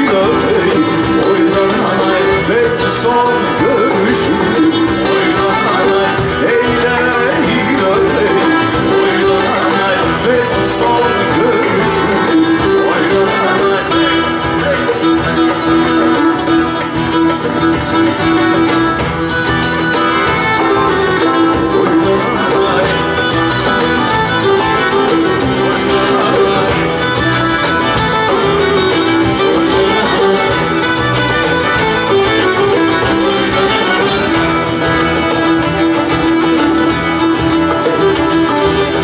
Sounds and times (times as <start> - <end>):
Music: 0.0 - 39.0.